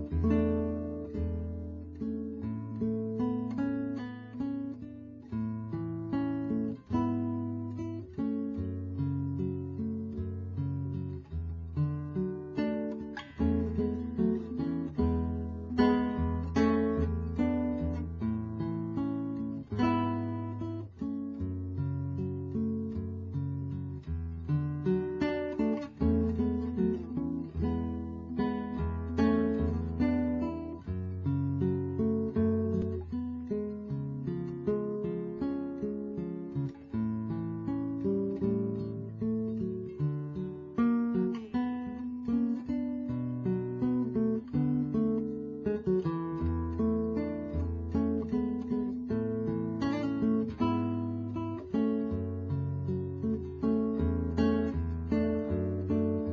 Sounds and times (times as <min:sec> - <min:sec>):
Acoustic guitar: 0:00.0 - 0:56.3.